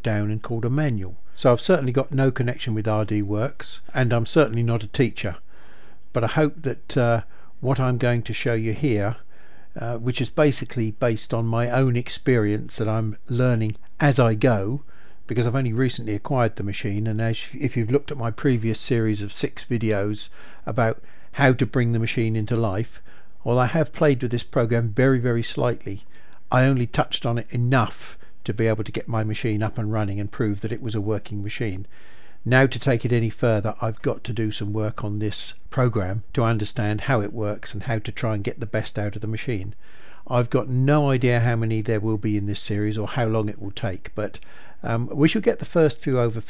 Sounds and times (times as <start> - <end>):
Speech: 0.0 - 5.4, 6.1 - 9.2, 9.8 - 46.5.